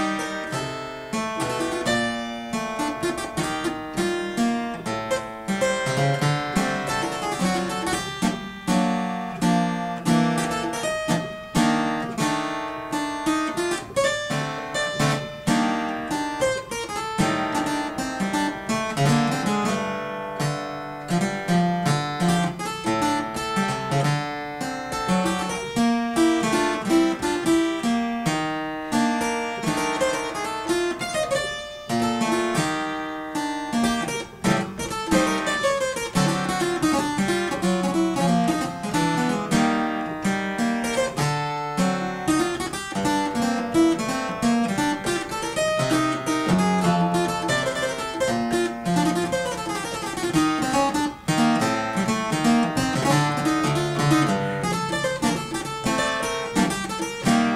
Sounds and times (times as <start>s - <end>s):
Music: 0.0s - 57.5s.